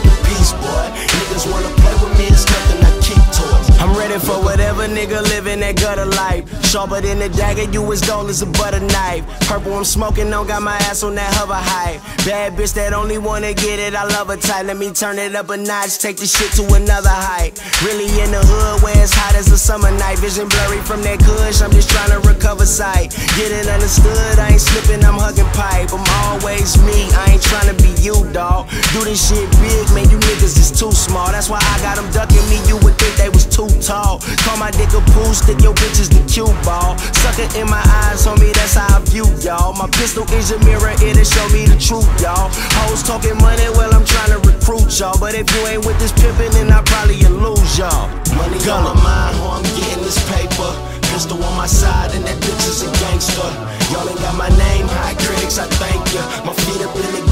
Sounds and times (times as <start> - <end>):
Music: 0.0 - 57.3
Rapping: 0.0 - 57.3.